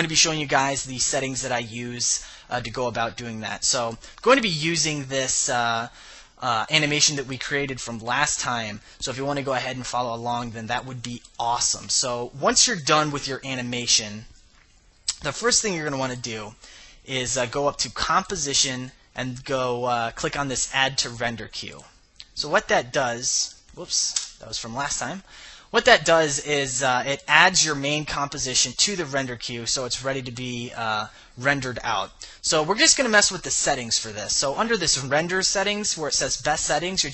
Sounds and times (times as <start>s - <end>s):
Speech: 0.0s - 14.3s, 15.1s - 37.1s.